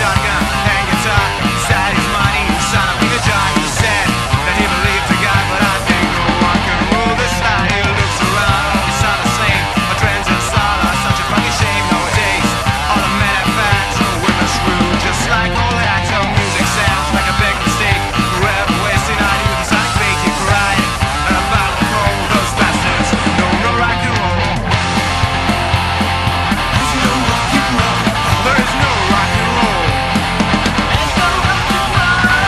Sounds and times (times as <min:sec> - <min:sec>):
Rock and roll: 0:00.0 - 0:32.4.